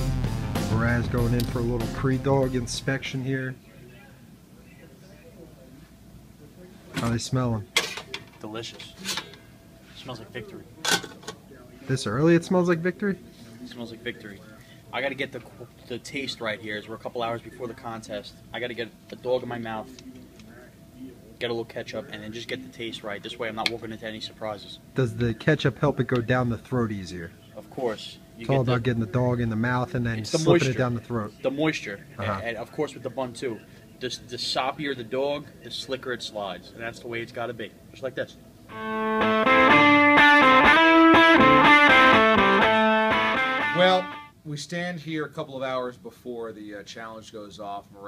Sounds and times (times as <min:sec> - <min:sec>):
Speech: 0:00.7 - 0:09.1, 0:10.0 - 0:38.4, 0:43.8 - 0:48.0.